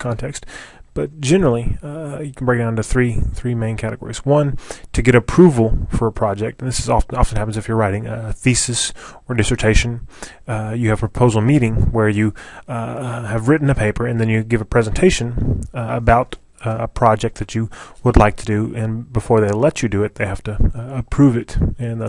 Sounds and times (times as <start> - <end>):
Speech: 0.0 - 22.0.